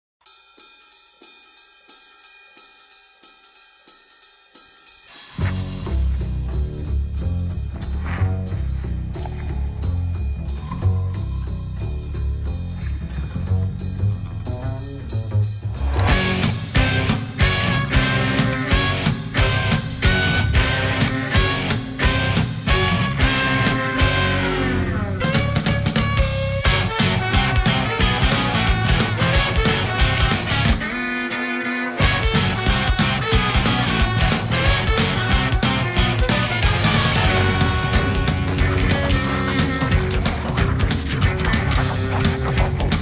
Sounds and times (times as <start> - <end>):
Music: 0.2 - 43.0.